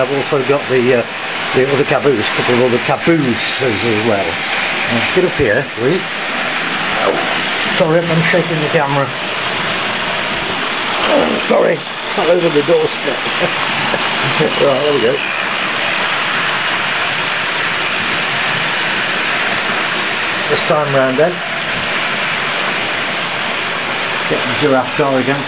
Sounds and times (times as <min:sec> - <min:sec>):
Speech: 0:00.0 - 0:06.1, 0:07.8 - 0:09.2, 0:11.0 - 0:13.5, 0:14.3 - 0:15.3, 0:20.5 - 0:21.4, 0:24.3 - 0:25.4
Train: 0:00.0 - 0:25.4.